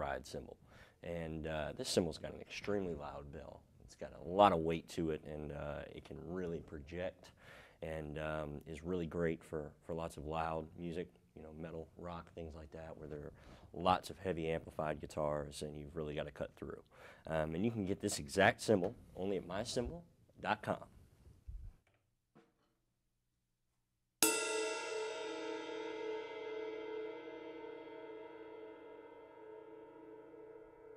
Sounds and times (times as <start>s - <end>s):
Cymbal: 24.2s - 30.9s.